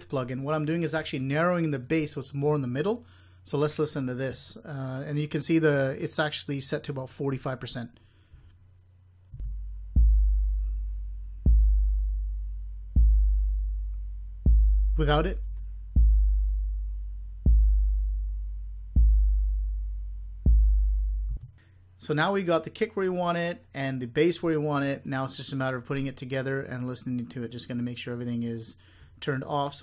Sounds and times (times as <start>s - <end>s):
Speech: 0.0s - 8.0s, 15.0s - 15.4s, 22.0s - 29.8s
Music: 9.4s - 21.4s.